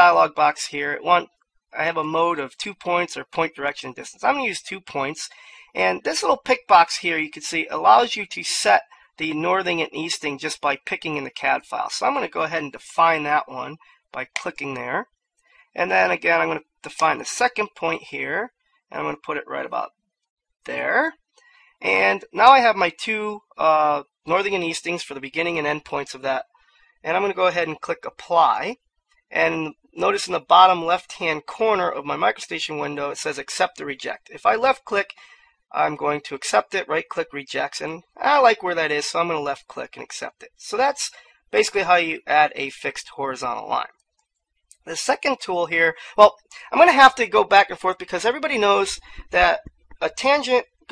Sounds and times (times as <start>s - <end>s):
Speech: 0.0s - 15.0s, 15.8s - 19.9s, 20.7s - 21.1s, 21.8s - 26.4s, 27.1s - 43.9s, 44.8s - 50.6s.